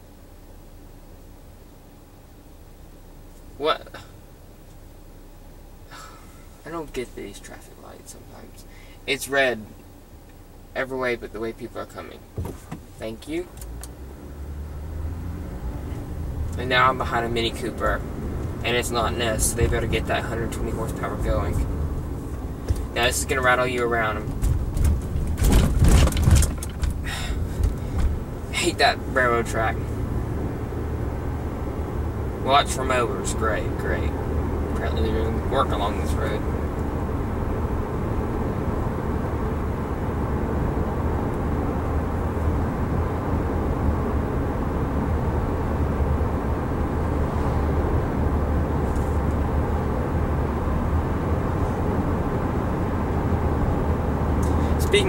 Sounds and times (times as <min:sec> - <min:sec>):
Car: 0:00.0 - 0:55.0.